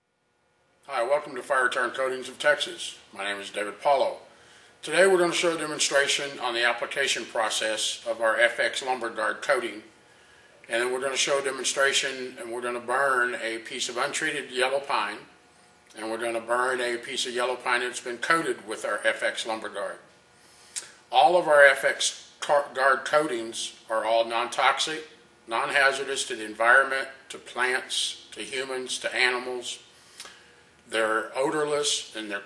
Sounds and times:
Speech: 0.9s - 9.9s, 10.7s - 15.3s, 15.9s - 20.1s, 21.1s - 29.8s, 30.9s - 32.4s.

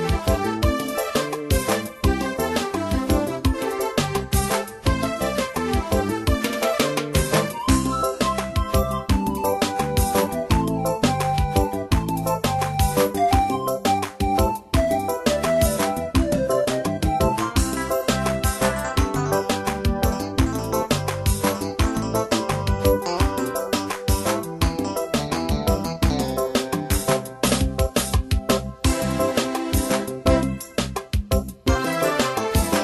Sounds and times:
Background music: 0.0s - 32.8s.

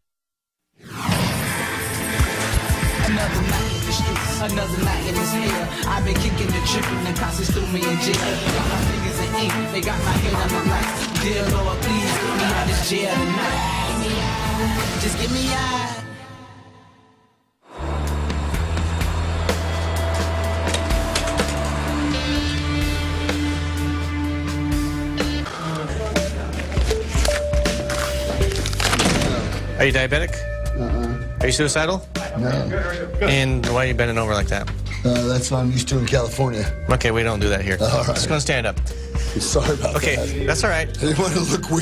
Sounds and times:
Music: 0.9s - 41.8s.

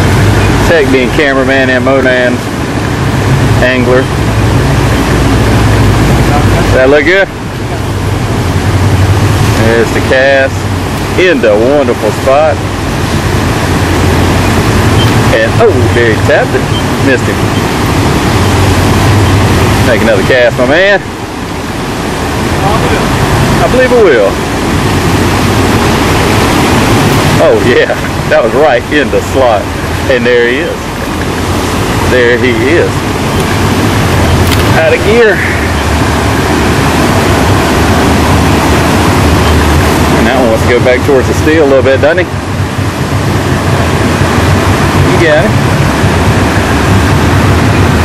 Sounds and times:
Outside, rural or natural: 0.0s - 48.0s
Speech: 0.6s - 2.4s, 3.6s - 4.1s, 6.3s - 7.3s, 9.6s - 10.6s, 11.2s - 12.6s, 15.3s - 17.4s, 19.9s - 21.1s, 22.6s - 24.4s, 27.4s - 30.8s, 32.1s - 33.0s, 34.7s - 35.5s, 40.2s - 42.3s, 45.0s - 45.6s.

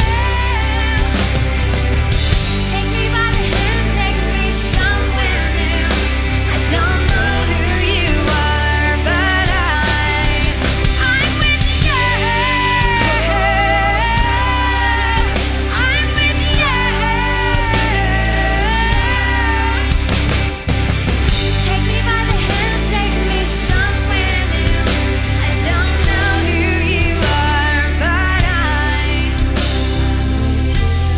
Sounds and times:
Pop music: 0.0s - 31.1s
Singing: 2.7s - 19.9s.

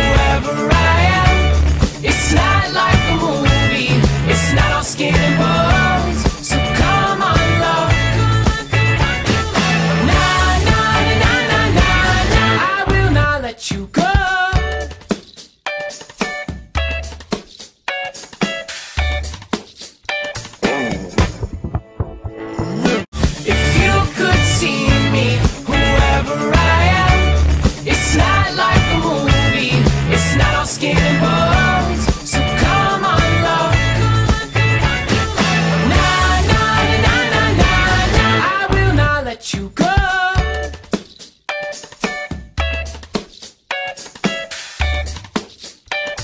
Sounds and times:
Music: 0.0s - 46.2s.

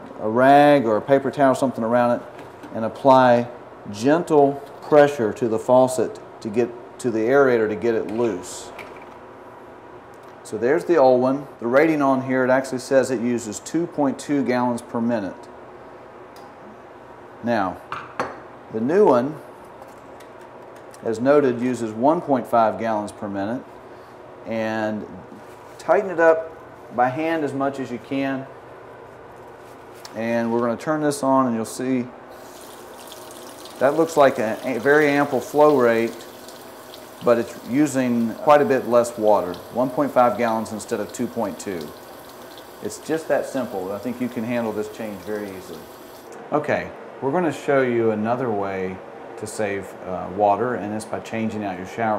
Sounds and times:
Speech: 0.2s - 8.8s, 10.4s - 15.5s, 17.4s - 17.8s, 18.7s - 19.4s, 21.0s - 23.7s, 24.5s - 28.5s, 30.1s - 32.1s, 33.8s - 36.3s, 37.2s - 42.0s, 42.8s - 45.8s, 46.5s - 52.1s
Water tap, faucet: 32.3s - 46.3s
Water: 32.4s - 46.3s.

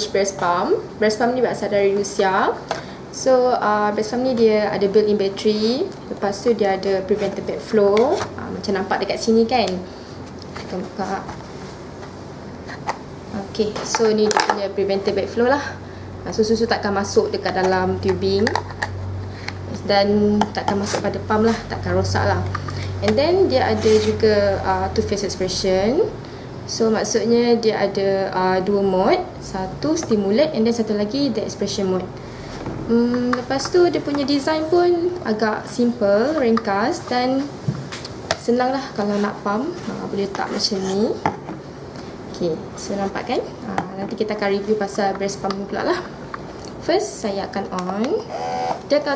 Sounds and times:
Speech: 0.0s - 2.6s, 3.2s - 9.9s, 10.6s - 11.4s, 13.3s - 18.6s, 19.7s - 32.1s, 32.9s - 37.5s, 38.4s - 41.3s, 42.3s - 46.1s, 46.8s - 48.3s, 48.9s - 49.1s.

